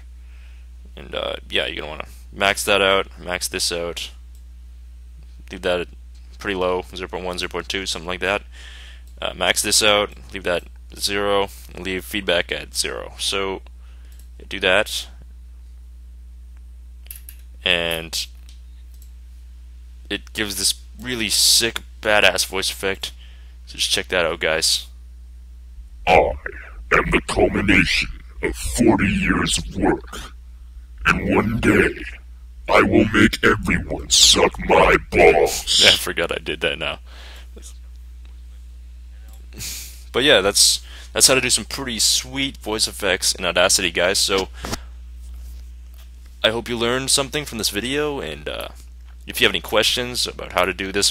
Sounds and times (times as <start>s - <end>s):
Speech: 1.0s - 4.2s, 5.5s - 8.5s, 9.2s - 13.7s, 14.4s - 15.2s, 17.6s - 18.4s, 20.1s - 24.9s, 26.1s - 30.3s, 31.0s - 37.0s, 37.6s - 37.8s, 40.1s - 44.6s, 46.4s - 51.1s.